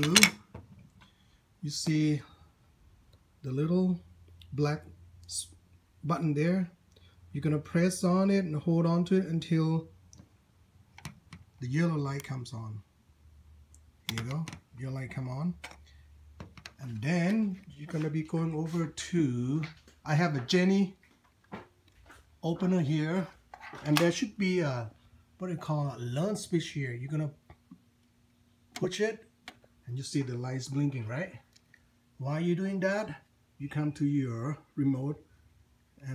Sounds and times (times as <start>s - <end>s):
Speech: 0.0s - 0.4s, 1.6s - 2.4s, 3.4s - 6.8s, 7.4s - 9.9s, 11.6s - 12.9s, 14.1s - 15.7s, 16.8s - 21.0s, 22.4s - 27.4s, 28.8s - 31.5s, 32.2s - 35.2s.